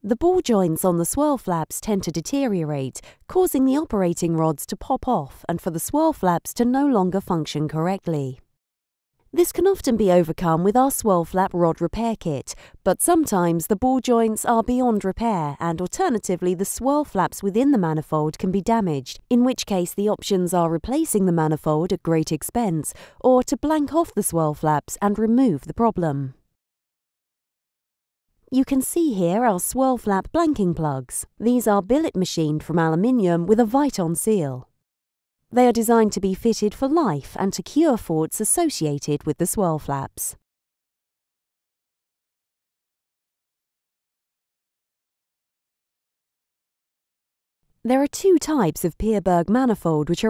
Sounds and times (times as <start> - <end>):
Speech: 0.0 - 8.4, 9.4 - 26.4, 28.5 - 34.7, 35.6 - 40.4, 47.9 - 50.3.